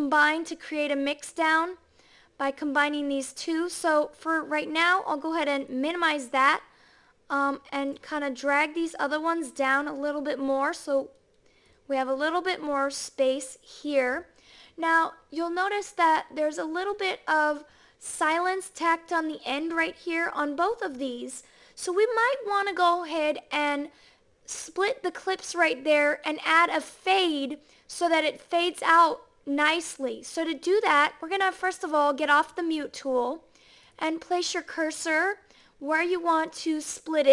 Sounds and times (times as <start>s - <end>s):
Speech: 0.0s - 1.8s, 2.4s - 6.7s, 7.3s - 11.2s, 11.9s - 23.9s, 24.5s - 33.4s, 34.0s - 37.3s.